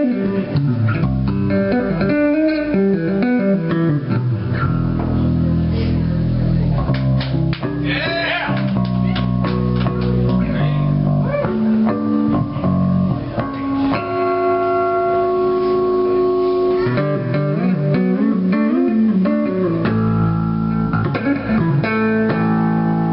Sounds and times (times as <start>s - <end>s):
Tapping (guitar technique): 0.0s - 5.4s, 6.8s - 7.9s, 8.5s - 23.1s
Speech: 7.9s - 9.3s, 10.4s - 11.4s.